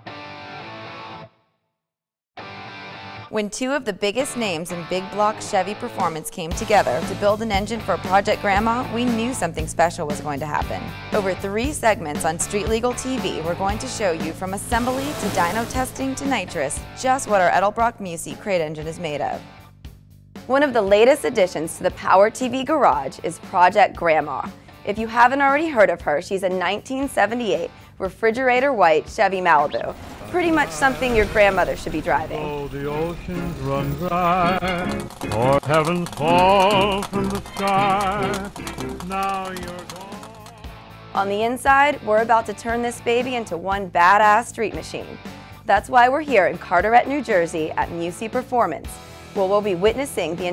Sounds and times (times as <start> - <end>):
Music: 0.0 - 1.6, 2.4 - 50.5
Speech: 3.4 - 19.4, 20.5 - 33.9, 35.4 - 38.4, 39.0 - 40.5, 41.2 - 50.5.